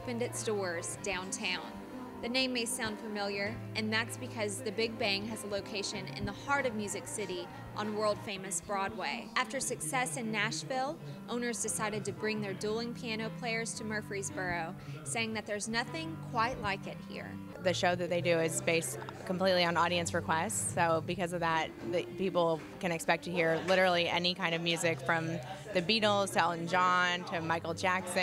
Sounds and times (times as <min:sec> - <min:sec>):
Music: 0:00.0 - 0:28.2
Speech: 0:00.0 - 0:28.2.